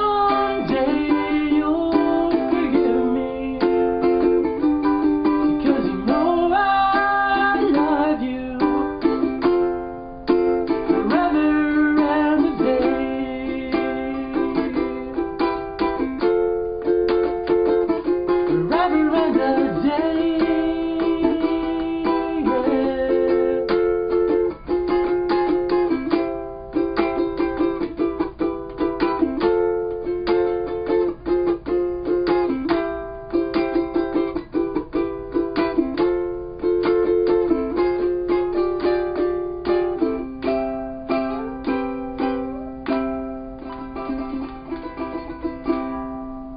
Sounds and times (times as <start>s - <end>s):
Bowed string instrument: 0.0s - 46.5s
Guitar: 0.0s - 46.5s
Ukulele: 0.0s - 46.5s.